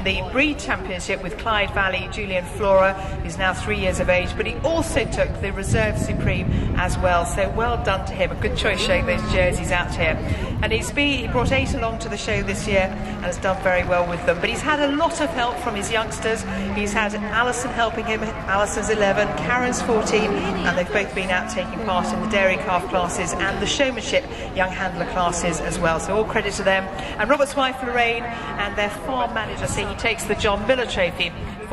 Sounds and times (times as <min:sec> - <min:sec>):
Speech: 0:00.0 - 0:31.7.